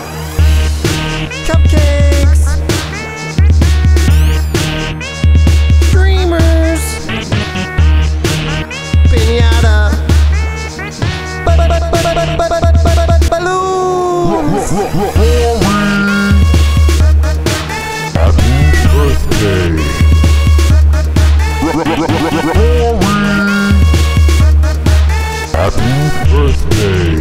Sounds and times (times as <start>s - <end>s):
Electronica: 0.0s - 27.2s.